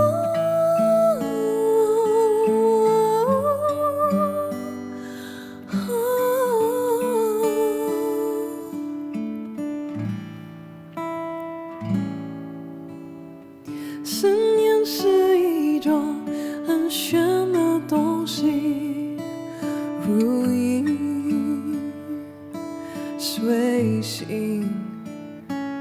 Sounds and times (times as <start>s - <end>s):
Acoustic guitar: 0.0s - 25.8s.